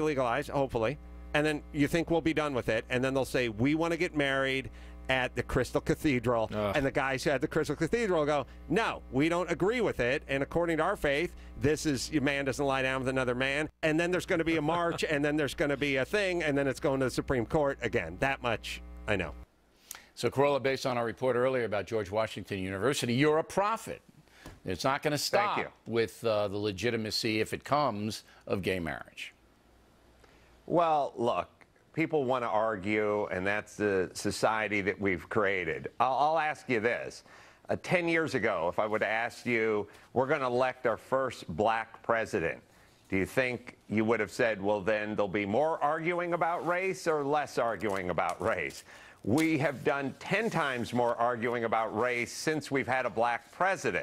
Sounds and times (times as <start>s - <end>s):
Speech: 0.0s - 19.4s, 20.2s - 24.0s, 24.6s - 29.4s, 30.7s - 54.0s.